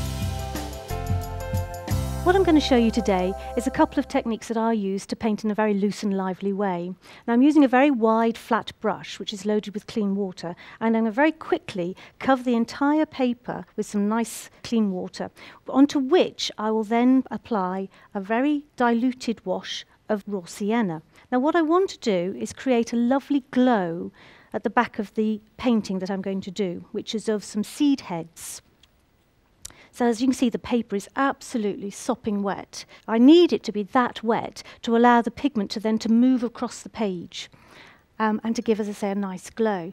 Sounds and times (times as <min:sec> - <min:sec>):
Speech: 0:02.2 - 0:28.7, 0:30.0 - 0:37.5, 0:38.2 - 0:39.9.